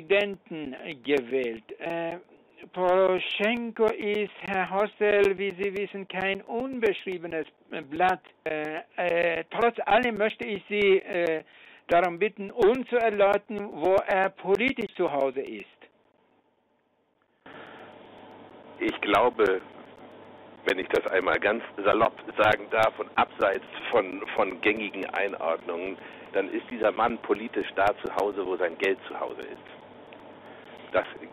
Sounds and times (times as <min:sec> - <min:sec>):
Speech: 0:00.0 - 0:15.9, 0:18.8 - 0:19.7, 0:20.7 - 0:29.8, 0:30.9 - 0:31.3.